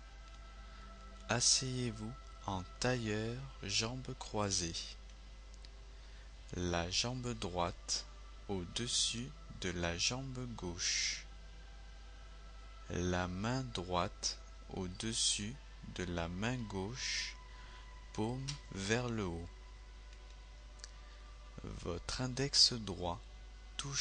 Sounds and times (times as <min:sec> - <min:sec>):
Speech: 0:01.3 - 0:05.0, 0:06.5 - 0:11.3, 0:12.9 - 0:17.4, 0:18.2 - 0:19.5, 0:21.6 - 0:23.2, 0:23.8 - 0:24.0.